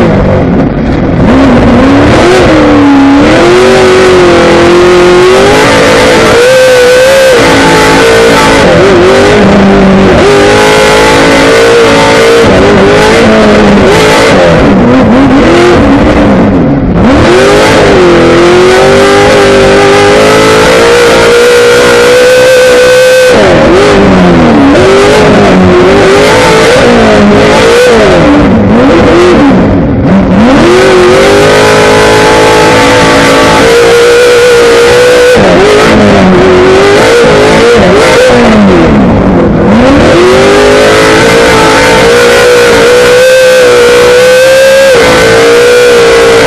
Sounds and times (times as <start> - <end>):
Car: 0.0 - 46.4.